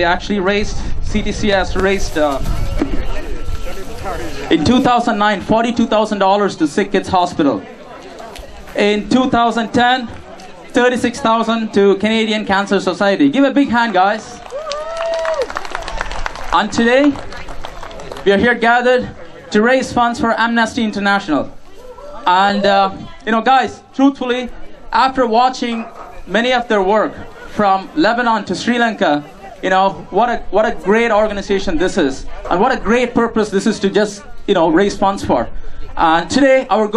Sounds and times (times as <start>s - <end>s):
Speech: 0.0s - 14.4s, 16.5s - 17.2s, 18.2s - 36.9s.